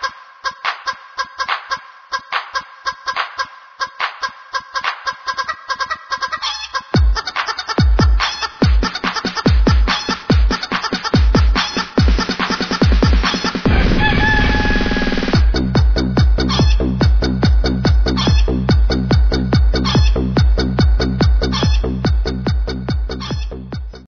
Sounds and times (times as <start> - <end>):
Chicken, rooster: 5.3 - 7.7, 13.7 - 15.2, 19.8 - 20.2, 21.5 - 21.8, 23.2 - 23.5.